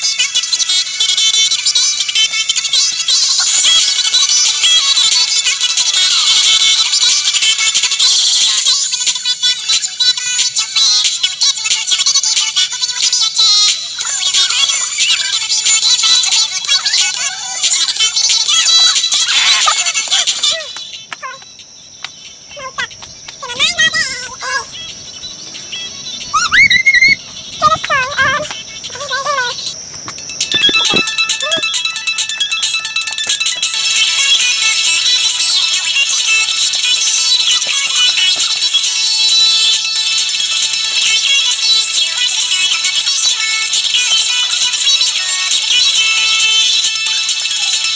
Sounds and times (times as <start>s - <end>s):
Music: 0.0s - 47.9s
Speech: 22.5s - 24.8s, 27.6s - 29.8s.